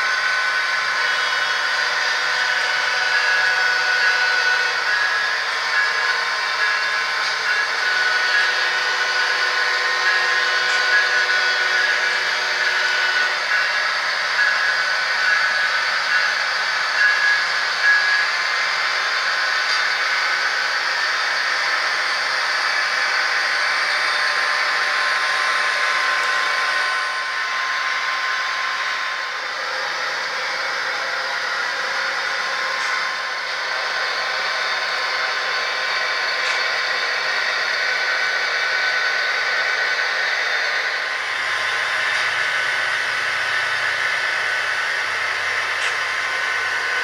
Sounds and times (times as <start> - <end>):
Train: 0.0 - 47.0.